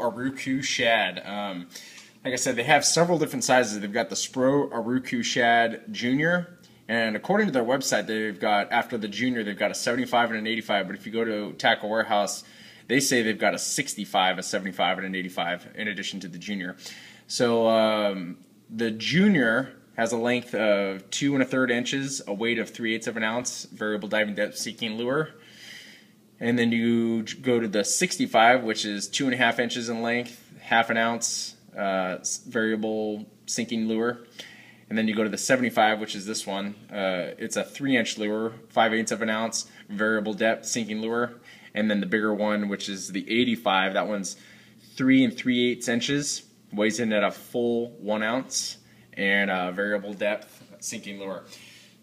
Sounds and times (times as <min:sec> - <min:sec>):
Speech: 0:00.0 - 0:25.4, 0:26.4 - 0:34.3, 0:34.9 - 0:44.4, 0:45.0 - 0:51.5.